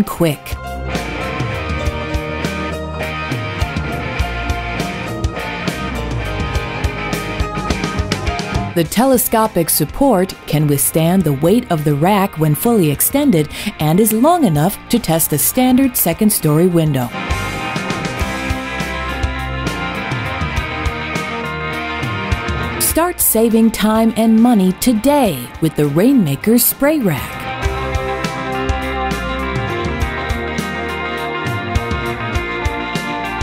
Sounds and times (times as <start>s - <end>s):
Speech: 0.0s - 0.6s, 8.8s - 17.1s, 22.8s - 27.4s
Music: 0.0s - 33.4s.